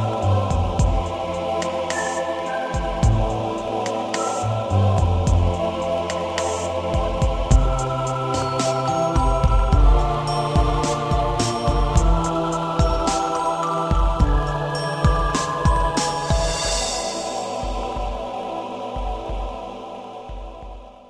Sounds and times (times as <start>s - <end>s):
Ambient music: 0.0s - 21.0s.